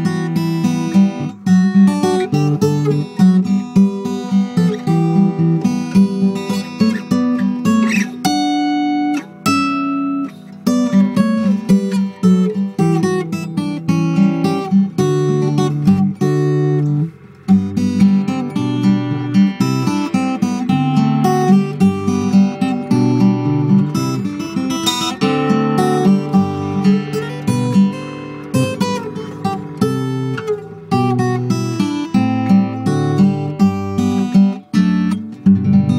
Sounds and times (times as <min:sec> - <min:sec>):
Acoustic guitar: 0:00.0 - 0:35.9
Strum: 0:00.0 - 0:35.9.